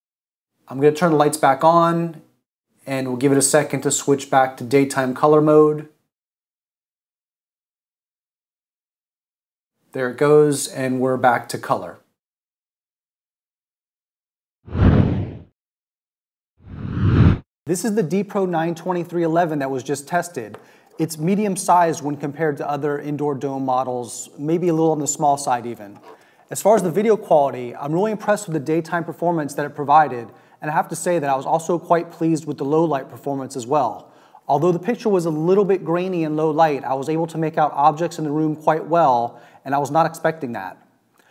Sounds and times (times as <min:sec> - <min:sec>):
Speech: 0:00.7 - 0:06.0, 0:09.9 - 0:12.1, 0:17.7 - 0:40.9.